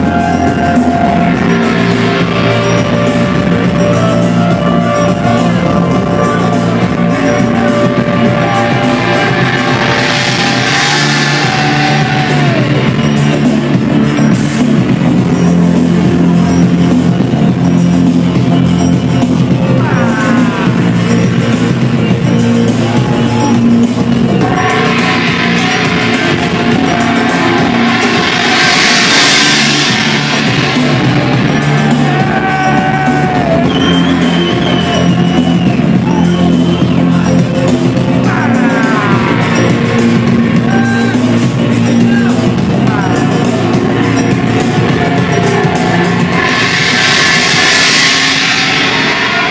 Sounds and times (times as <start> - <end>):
Gong: 0.0 - 49.5.